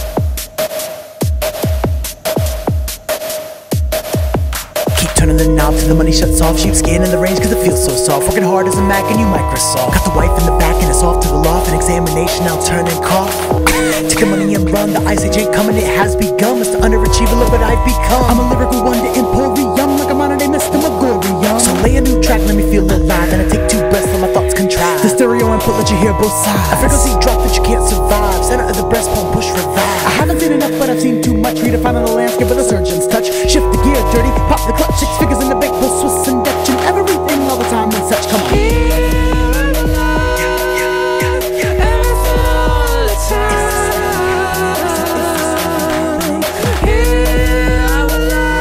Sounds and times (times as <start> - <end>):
Electronica: 5.0 - 48.6
Rapping: 5.0 - 48.6.